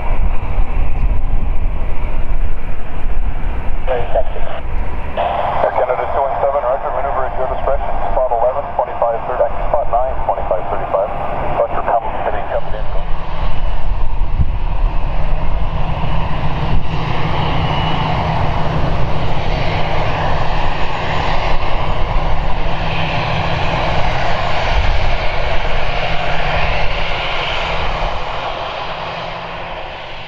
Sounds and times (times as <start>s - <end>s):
Aircraft engine: 0.0s - 30.2s
Fixed-wing aircraft, airplane: 0.0s - 30.2s
Outside, urban or manmade: 0.0s - 30.2s.